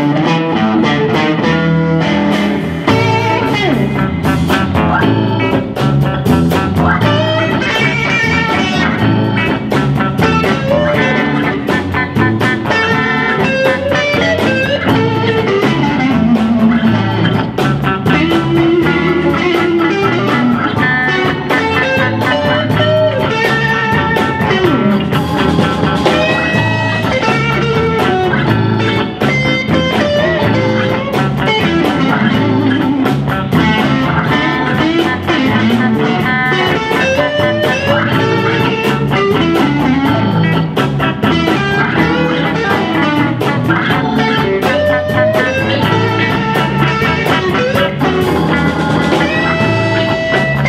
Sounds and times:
Music: 0.0 - 50.6.

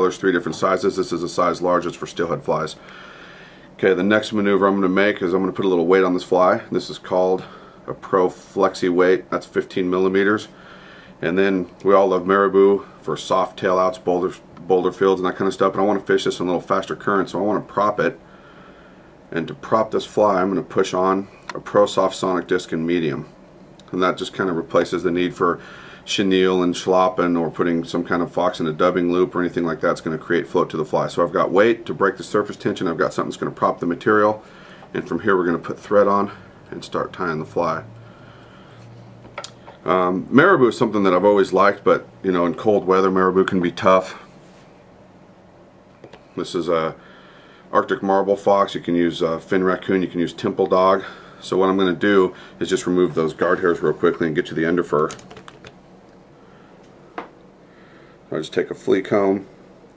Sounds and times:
Speech: 0.0 - 2.8, 3.8 - 10.6, 11.2 - 18.2, 19.3 - 37.9, 39.8 - 44.3, 46.4 - 47.0, 47.7 - 55.3, 58.3 - 59.5.

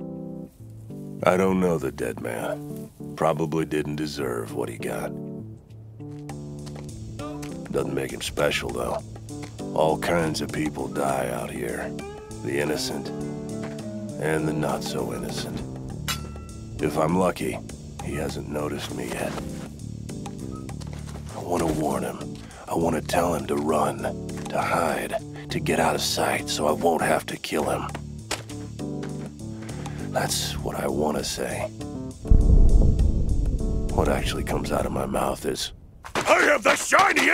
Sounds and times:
Music: 0.0 - 35.6
Speech: 1.2 - 2.6, 3.2 - 5.1, 7.7 - 9.0, 9.8 - 13.1, 14.2 - 15.6, 16.8 - 19.4, 21.3 - 28.0, 30.2 - 31.8, 33.9 - 37.3.

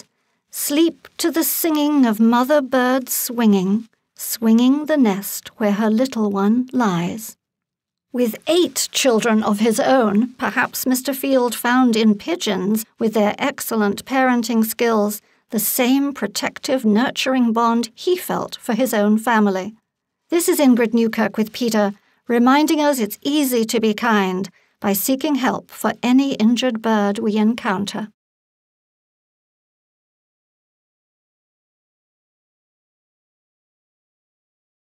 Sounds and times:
Speech: 0.0 - 7.4, 8.2 - 28.2.

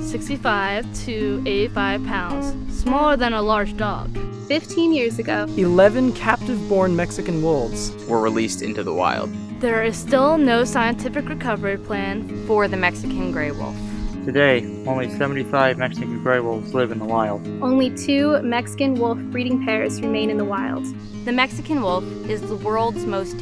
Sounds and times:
Music: 0.0 - 23.4
Speech: 0.1 - 9.0, 14.3 - 23.4.

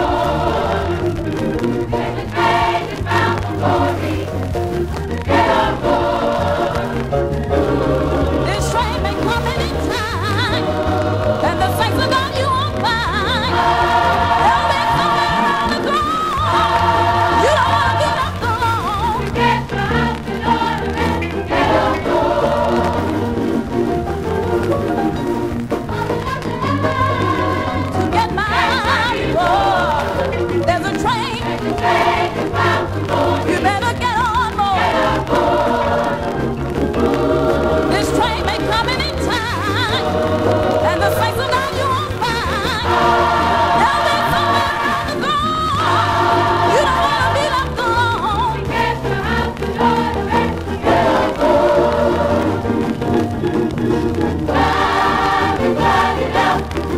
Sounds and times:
Choir: 0.0 - 25.1, 25.8 - 56.9.

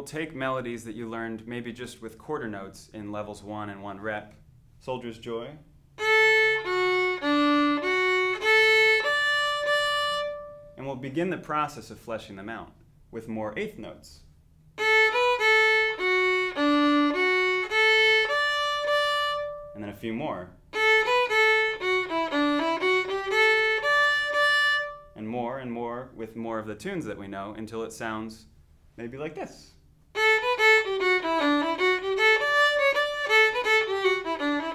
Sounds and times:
Speech: 0.0 - 5.7, 10.8 - 14.3, 19.8 - 20.6, 25.2 - 29.8
Violin, fiddle: 6.0 - 10.7, 14.8 - 19.8, 20.8 - 25.1, 30.1 - 34.7.

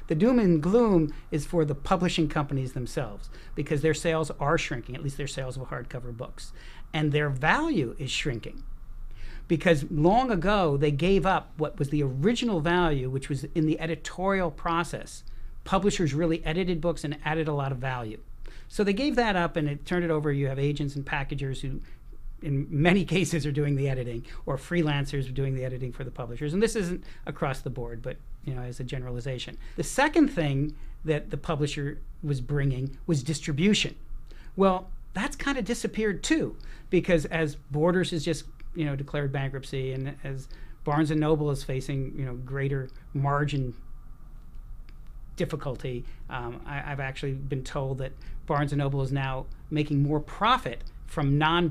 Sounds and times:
Speech: 0.0 - 8.6, 9.5 - 34.0, 34.6 - 43.8, 45.4 - 51.7.

